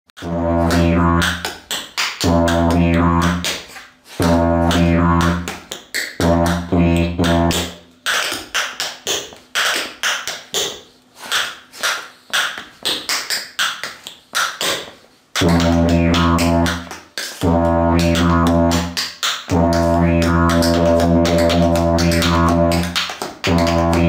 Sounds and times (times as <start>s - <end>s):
Didgeridoo: 0.2s - 1.5s, 2.2s - 5.6s, 6.2s - 7.8s, 15.4s - 24.0s.